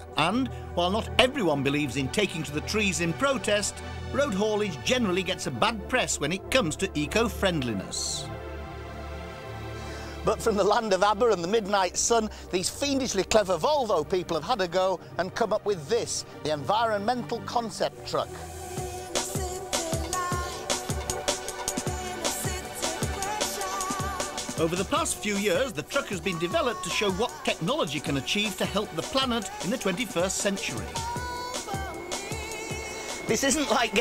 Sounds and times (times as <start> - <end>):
Speech: 0.0 - 8.3, 10.2 - 18.4, 24.6 - 31.1, 33.3 - 34.0
Music: 0.0 - 34.0.